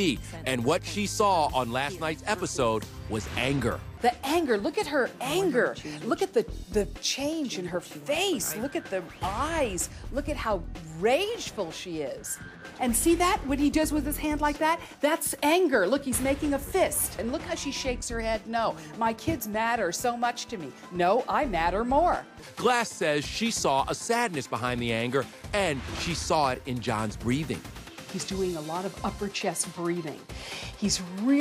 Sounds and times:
Music: 0.0s - 31.4s.

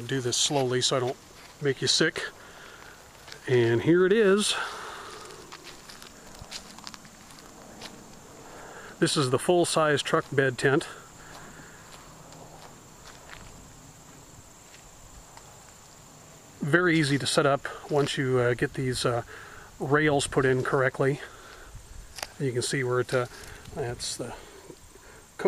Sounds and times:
Speech: 0.0s - 2.4s, 3.4s - 4.8s, 9.0s - 11.0s, 16.6s - 21.3s, 22.4s - 24.5s.

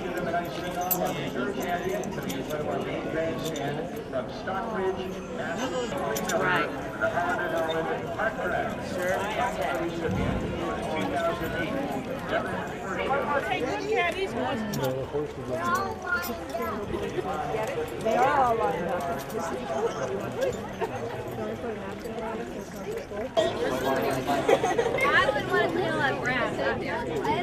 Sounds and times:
Chatter: 0.0s - 27.4s
Speech: 0.0s - 27.4s.

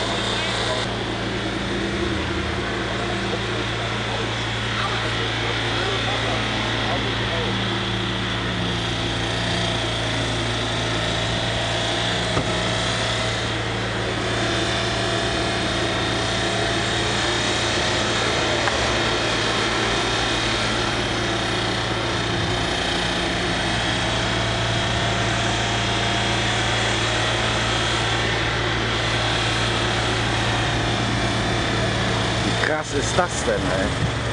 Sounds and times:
Car: 0.0s - 34.3s
Medium engine (mid frequency): 0.0s - 34.3s
Accelerating, revving, vroom: 8.9s - 33.8s.

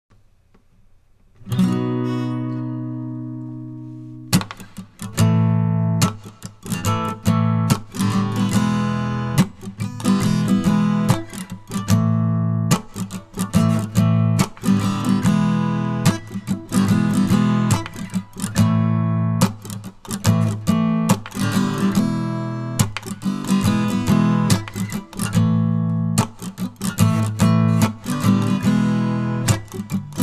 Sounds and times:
Acoustic guitar: 1.3s - 30.2s.

